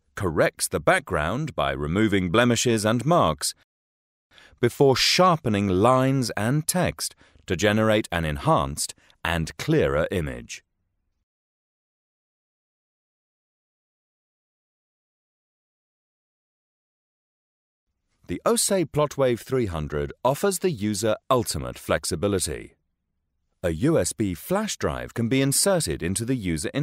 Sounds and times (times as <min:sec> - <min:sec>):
Speech: 0:00.2 - 0:03.6, 0:04.6 - 0:10.6, 0:18.3 - 0:22.8, 0:23.6 - 0:26.8.